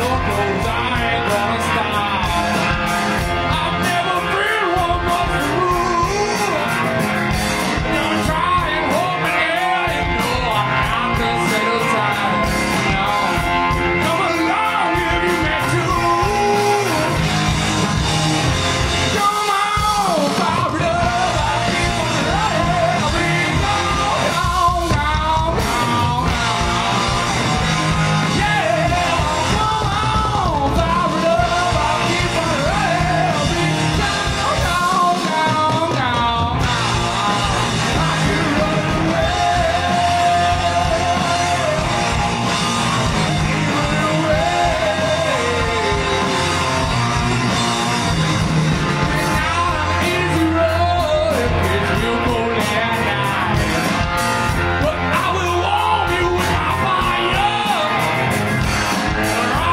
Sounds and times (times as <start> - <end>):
Music: 0.0 - 59.7.